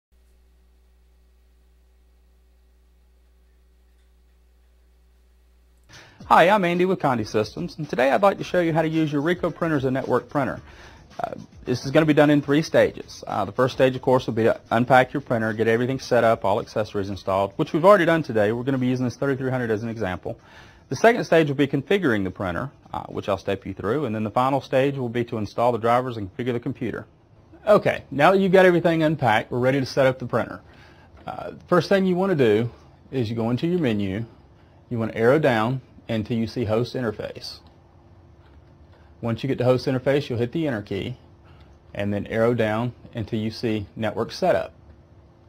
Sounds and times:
Speech: 6.2 - 37.7, 39.2 - 41.2, 41.9 - 44.8.

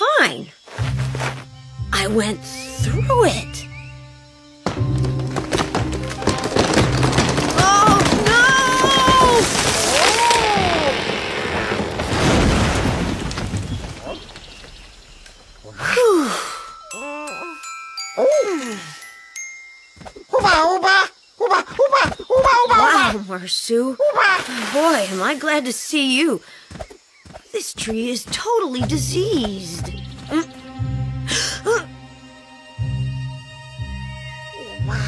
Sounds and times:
Music: 0.7 - 7.6, 16.7 - 20.3, 28.9 - 35.0
Groan: 7.6 - 11.8, 15.8 - 17.6
Speech: 21.9 - 26.4, 27.5 - 29.9.

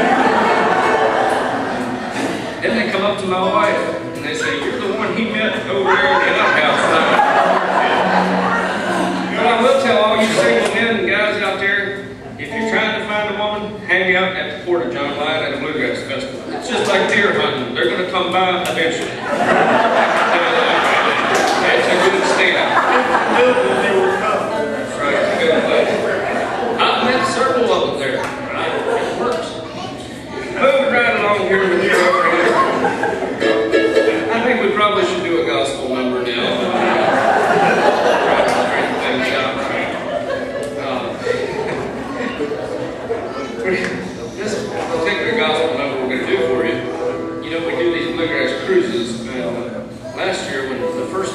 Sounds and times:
Speech: 2.6 - 19.5, 20.1 - 33.0, 33.9 - 51.3.

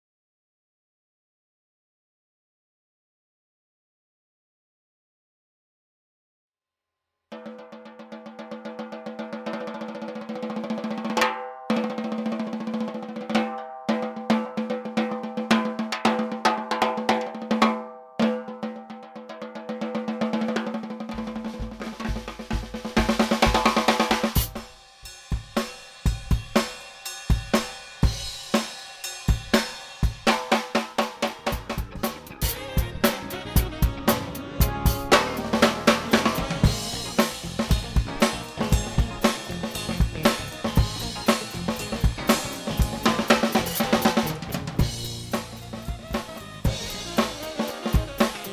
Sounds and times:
Bass drum: 21.1 - 24.7, 31.2 - 48.5.

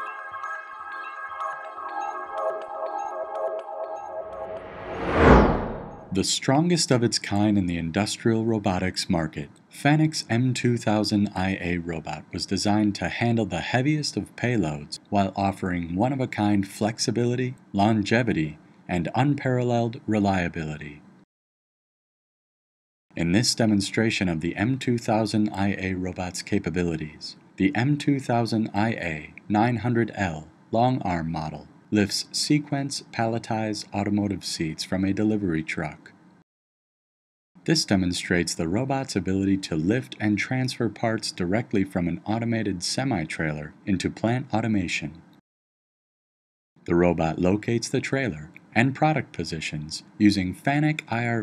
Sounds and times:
Speech: 6.2 - 21.1, 23.2 - 36.2, 37.6 - 45.3, 46.9 - 51.4.

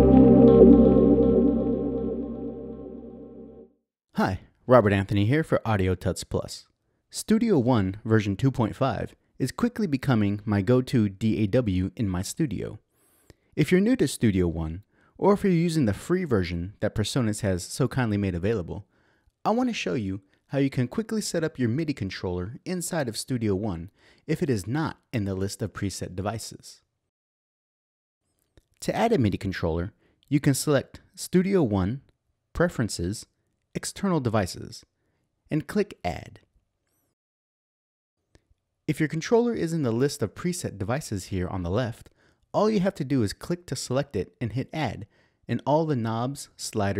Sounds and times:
Speech: 4.1 - 12.8, 13.6 - 26.9, 28.8 - 34.9, 35.5 - 36.5, 38.9 - 46.9.

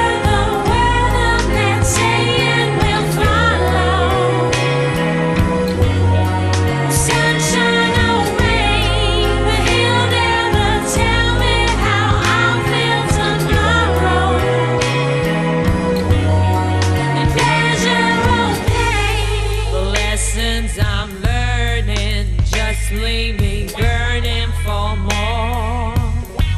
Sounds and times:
Music: 0.0 - 26.5.

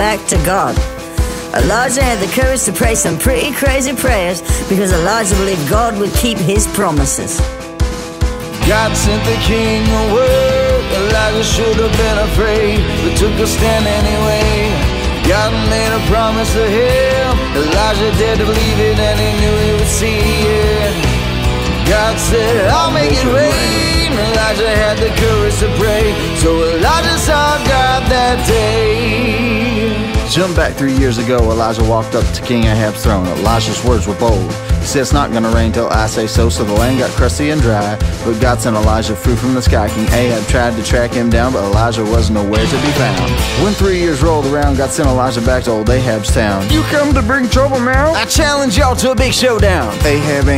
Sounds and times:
Speech: 0.0 - 0.9, 1.5 - 7.5, 30.3 - 50.5
Music: 0.0 - 50.5.

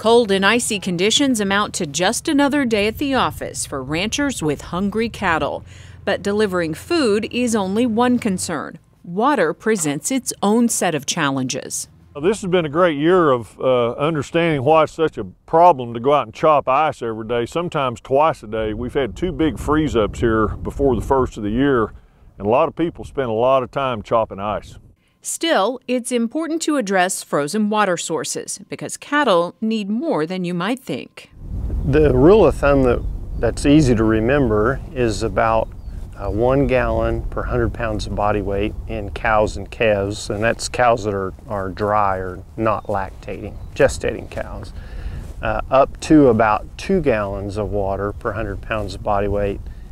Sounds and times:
Speech: 0.0 - 31.3, 31.9 - 44.8, 45.4 - 49.6.

